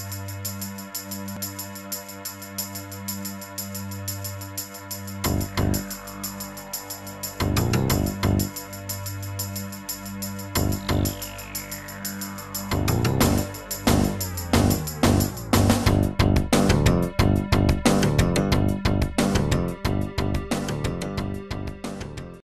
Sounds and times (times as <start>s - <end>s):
Music: 0.0s - 22.4s.